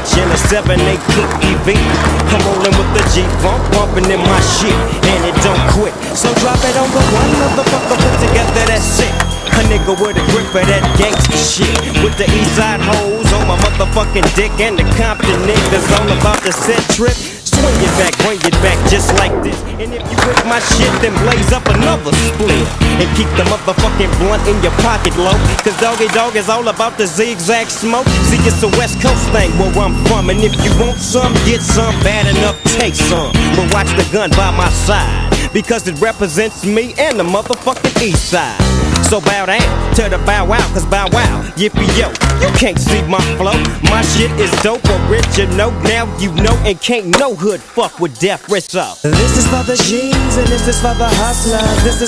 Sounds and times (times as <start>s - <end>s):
Skateboard: 0.0s - 48.8s
Music: 0.0s - 52.0s.